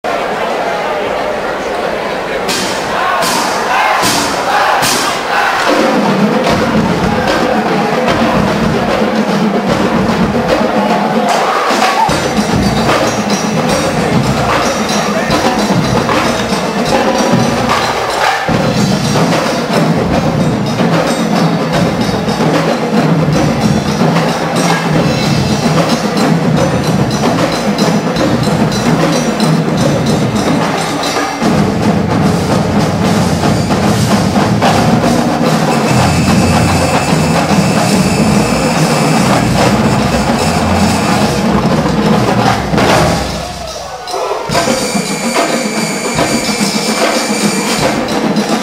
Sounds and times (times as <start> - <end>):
Percussion: 2.4 - 48.6.